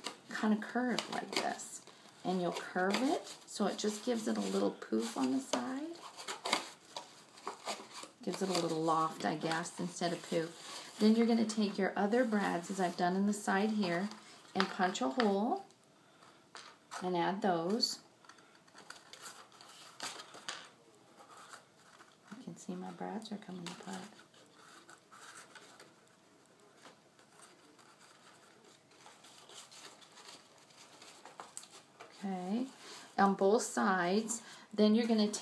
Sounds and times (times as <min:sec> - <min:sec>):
Speech: 0:00.3 - 0:06.0, 0:08.2 - 0:15.7, 0:17.0 - 0:18.0, 0:22.3 - 0:24.2, 0:32.2 - 0:35.4.